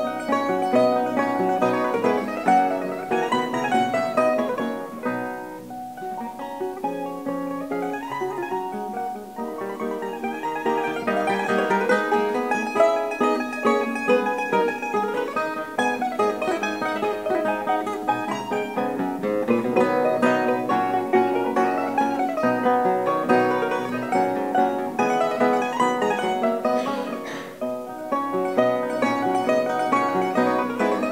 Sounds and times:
Mandolin: 0.0 - 31.1.

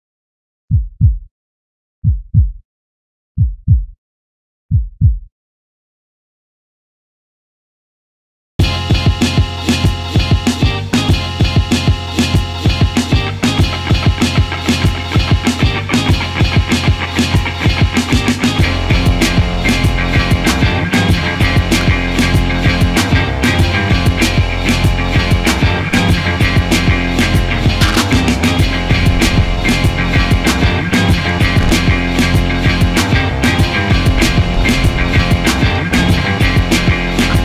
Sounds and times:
Music: 8.6 - 37.4.

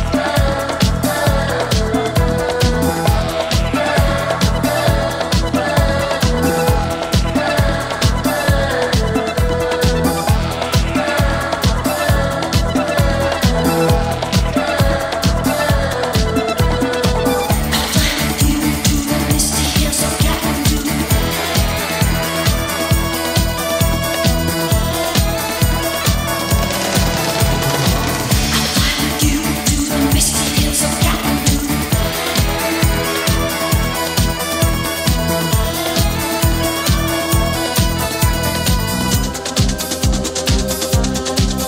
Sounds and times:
Disco: 0.0 - 41.6.

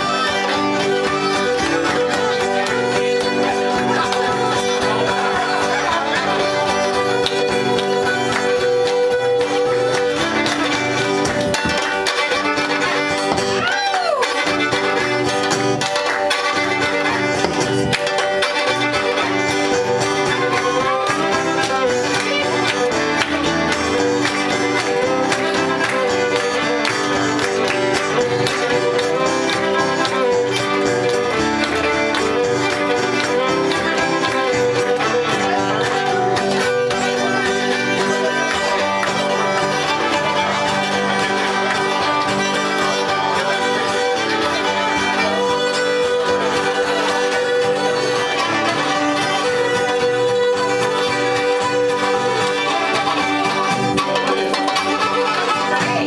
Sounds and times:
Violin, fiddle: 0.0 - 56.0.

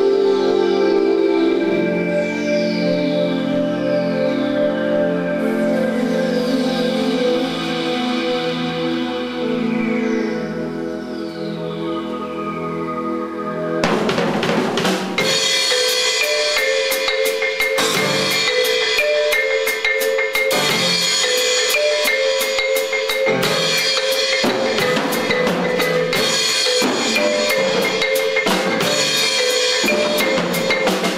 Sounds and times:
Marimba, xylophone: 0.0 - 31.1
Drum: 13.8 - 31.1.

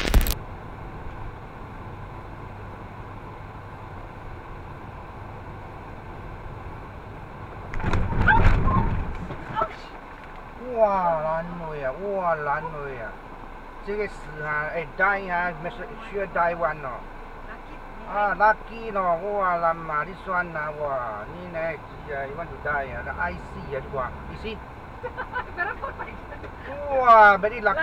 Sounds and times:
Traffic noise, roadway noise: 0.0 - 27.8.

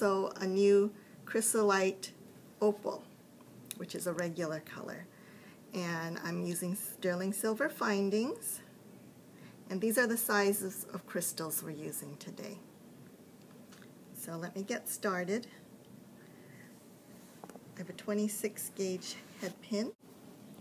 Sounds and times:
Speech: 0.0 - 3.1, 3.8 - 5.1, 5.8 - 8.7, 9.7 - 12.6, 14.2 - 15.6, 17.8 - 20.0.

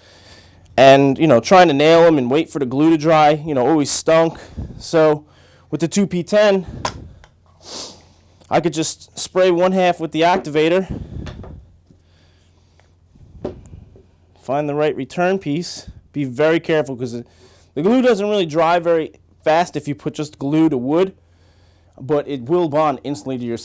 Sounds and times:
Speech: 0.8 - 6.7, 8.5 - 10.9, 14.4 - 21.2, 22.0 - 23.6.

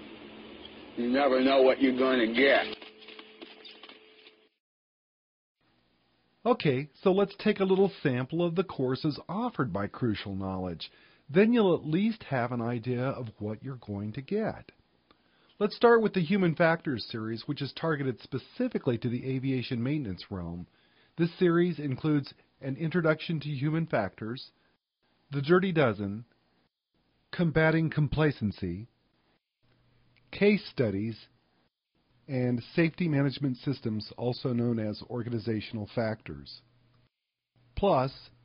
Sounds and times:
Speech: 1.0 - 2.8, 6.4 - 14.8, 15.6 - 24.6, 25.3 - 26.3, 27.3 - 28.9, 30.3 - 31.4, 32.3 - 36.7, 37.8 - 38.4.

